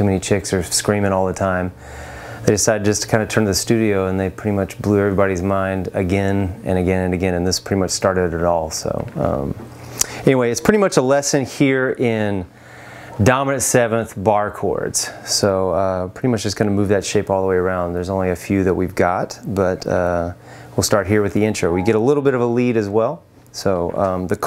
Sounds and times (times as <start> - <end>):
Speech: 0.0 - 1.8, 2.5 - 9.6, 10.2 - 12.5, 13.2 - 24.4.